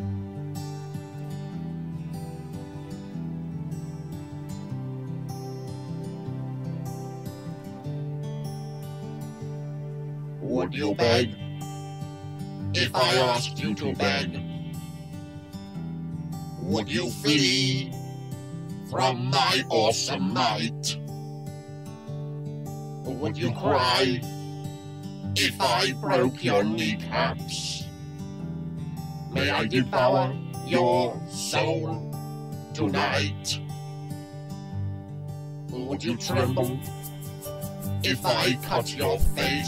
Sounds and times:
Background music: 0.0s - 39.6s
Speech: 10.4s - 11.4s, 12.8s - 14.4s, 16.6s - 17.9s, 18.9s - 21.0s, 23.1s - 24.2s, 25.4s - 27.8s, 29.4s - 32.0s, 32.8s - 33.6s, 35.7s - 36.9s, 38.0s - 39.6s.

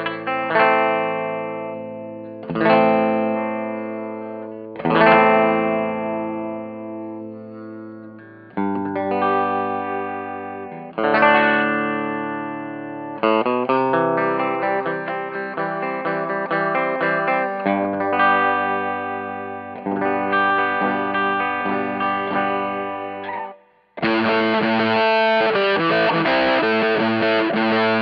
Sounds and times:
Guitar: 0.0s - 28.0s.

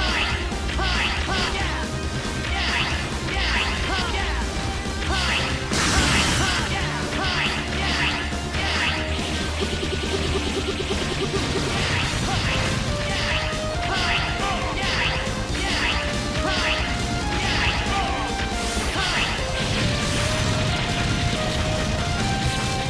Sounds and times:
Music: 0.0s - 22.8s.

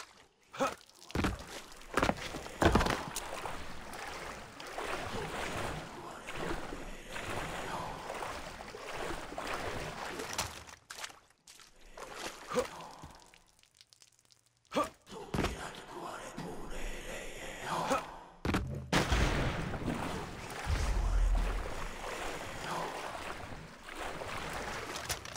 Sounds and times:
Speech: 14.7s - 18.3s.

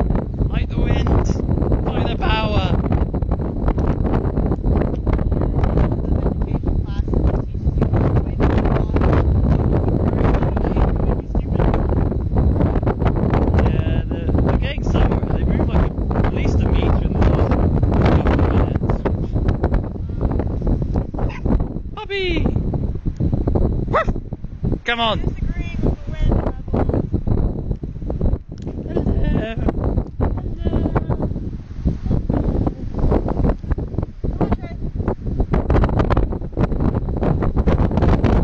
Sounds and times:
Speech: 0.5s - 2.8s, 5.2s - 11.8s, 13.6s - 17.5s, 22.0s - 22.5s, 24.9s - 26.9s, 30.4s - 31.2s, 34.4s - 34.8s.

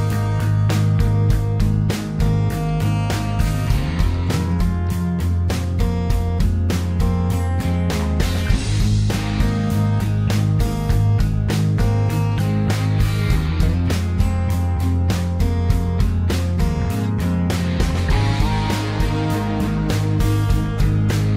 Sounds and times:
Music: 0.0s - 21.3s.

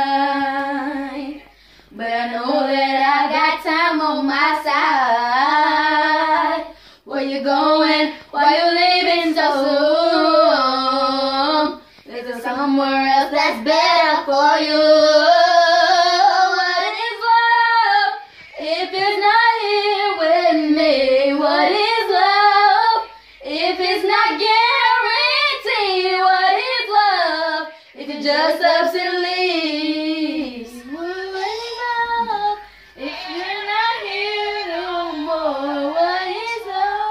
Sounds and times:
Child singing: 0.0s - 37.1s
Female singing: 0.0s - 37.1s.

